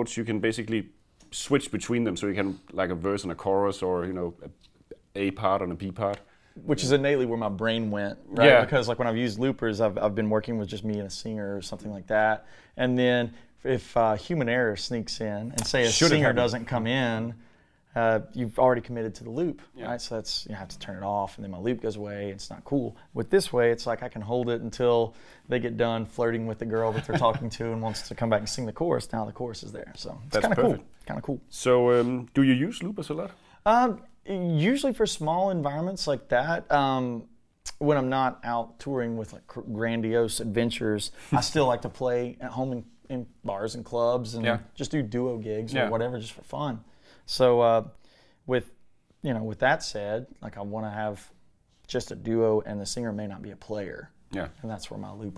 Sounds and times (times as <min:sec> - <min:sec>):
Speech: 0:00.0 - 0:47.9, 0:48.5 - 0:55.3.